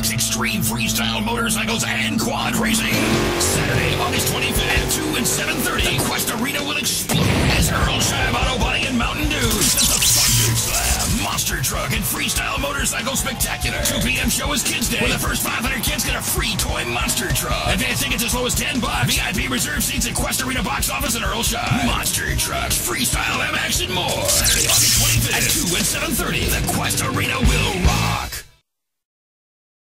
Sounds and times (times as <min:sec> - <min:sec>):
Music: 0:00.0 - 0:28.6
Speech: 0:00.0 - 0:28.6.